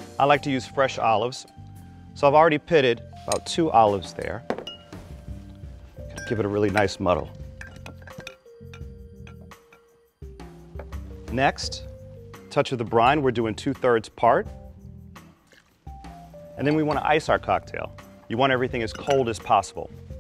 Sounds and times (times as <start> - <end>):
Music: 0.0 - 20.2
Speech: 0.2 - 1.5, 2.2 - 4.4, 6.2 - 7.3, 11.3 - 11.8, 12.5 - 14.5, 16.6 - 19.9.